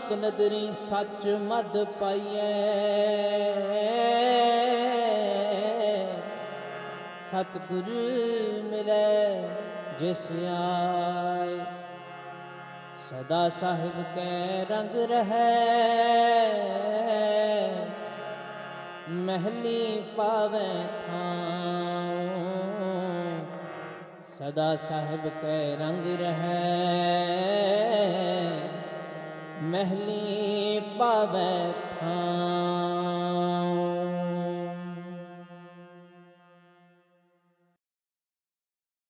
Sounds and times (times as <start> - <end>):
Music: 0.0 - 37.8.